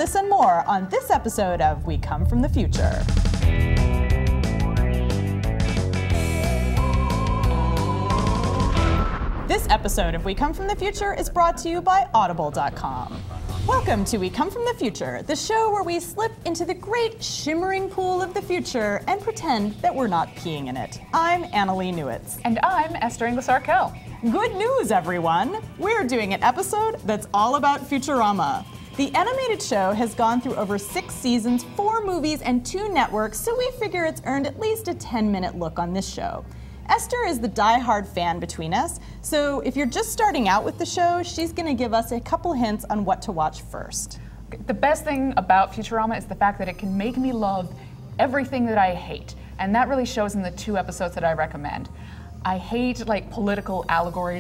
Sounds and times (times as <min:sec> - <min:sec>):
Speech: 0:00.0 - 0:03.1, 0:09.5 - 0:51.9, 0:52.5 - 0:54.4
Music: 0:00.0 - 0:54.4.